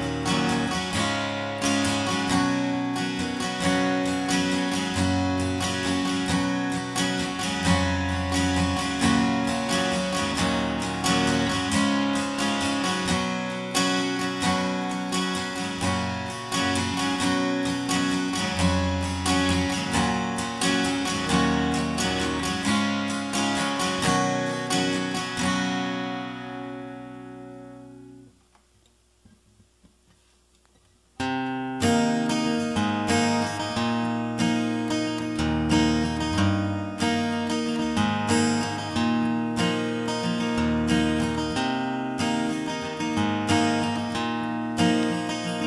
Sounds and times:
Music: 0.0s - 28.4s, 30.6s - 45.6s.

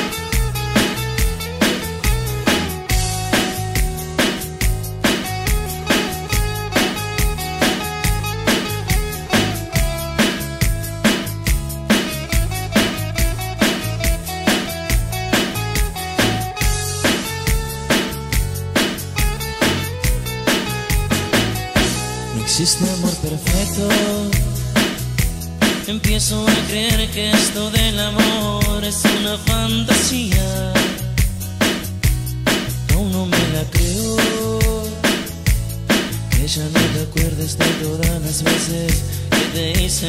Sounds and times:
Rock and roll: 0.0s - 40.0s.

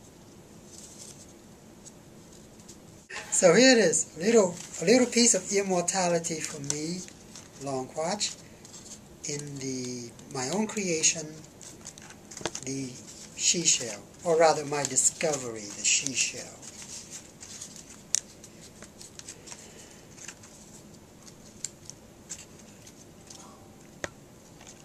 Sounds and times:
Inside, small room: 0.0s - 24.8s
Speech: 3.1s - 8.4s, 9.3s - 11.5s, 12.6s - 16.7s.

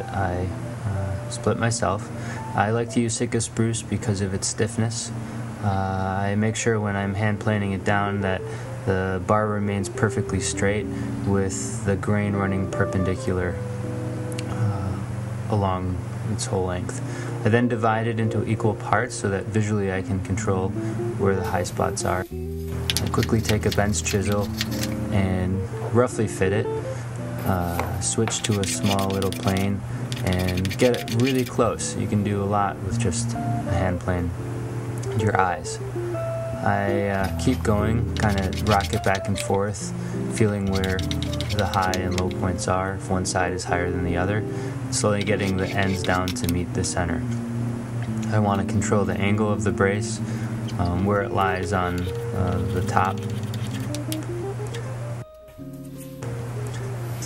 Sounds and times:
Filing (rasp): 23.0s - 25.0s, 27.6s - 31.6s, 37.2s - 39.6s, 40.4s - 42.4s, 45.1s - 46.5s, 51.9s - 54.0s
Rub: 23.0s - 25.0s, 27.4s - 31.6s, 37.1s - 39.6s, 40.4s - 42.4s, 45.1s - 46.5s, 51.5s - 54.1s
Wood: 27.8s - 31.5s, 38.2s - 39.6s, 40.6s - 42.3s, 45.2s - 46.5s.

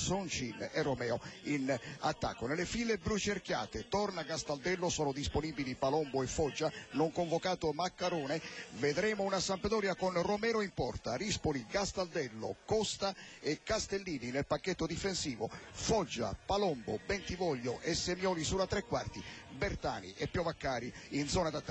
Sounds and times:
Speech: 0.0s - 21.7s.

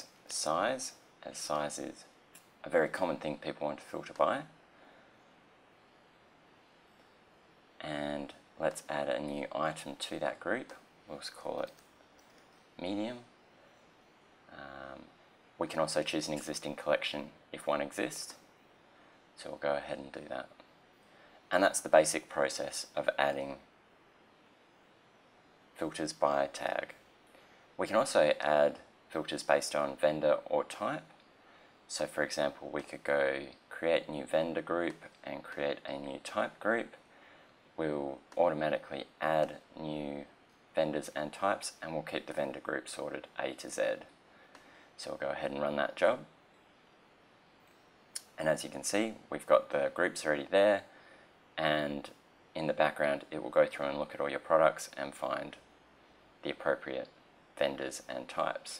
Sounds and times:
Speech: 0.0s - 4.6s, 7.8s - 11.8s, 12.8s - 13.3s, 14.5s - 18.5s, 19.4s - 20.6s, 21.5s - 23.7s, 25.8s - 27.0s, 27.8s - 31.2s, 31.9s - 37.0s, 37.8s - 44.2s, 45.0s - 46.3s, 48.2s - 50.9s, 51.6s - 55.7s, 56.4s - 58.7s.

